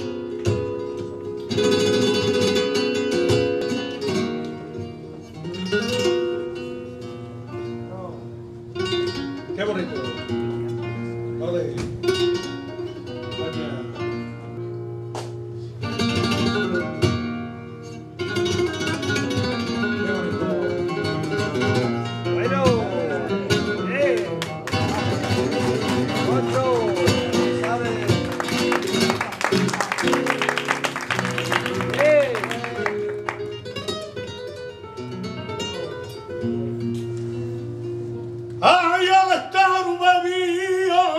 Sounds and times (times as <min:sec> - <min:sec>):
Music: 0:00.0 - 0:41.1.